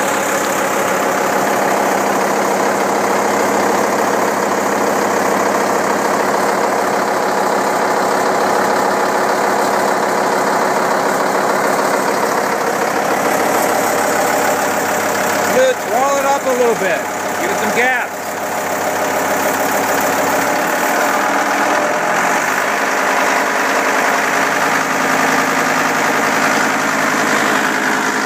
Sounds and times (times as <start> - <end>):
Speech: 15.5 - 18.2.